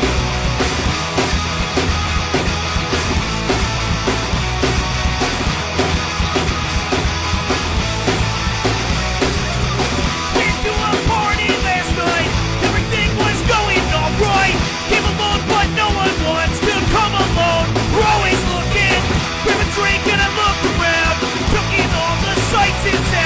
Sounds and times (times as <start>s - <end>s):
Exciting music: 0.0s - 23.2s.